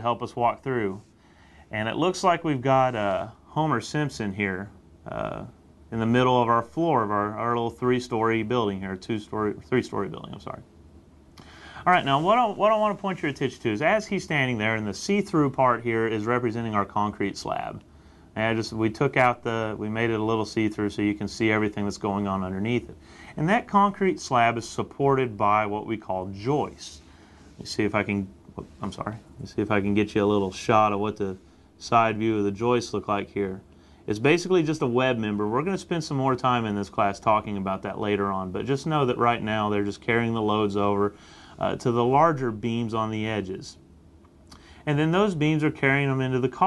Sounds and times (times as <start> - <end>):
Speech: 0.0 - 1.1, 1.7 - 10.7, 11.8 - 43.8, 44.8 - 46.6.